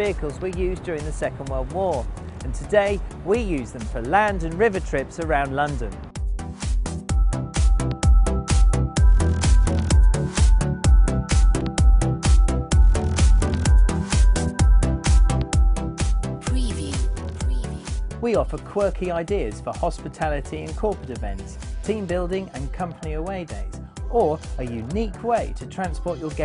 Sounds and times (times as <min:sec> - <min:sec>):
Speech: 0:00.0 - 0:06.0, 0:16.5 - 0:26.4
Music: 0:00.0 - 0:26.4.